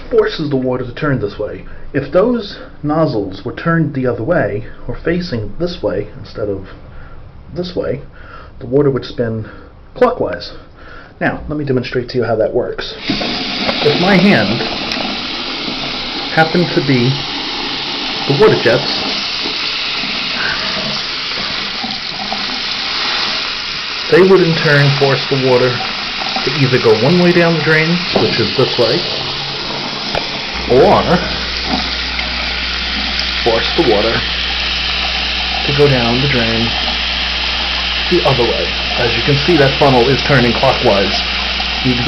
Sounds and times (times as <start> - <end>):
Speech: 0.1 - 6.8, 7.5 - 10.6, 11.2 - 13.0, 13.8 - 14.7, 16.4 - 17.2, 18.3 - 19.0, 24.1 - 25.8, 26.4 - 29.1, 30.7 - 31.3, 33.4 - 34.3, 35.6 - 36.8, 38.1 - 42.0.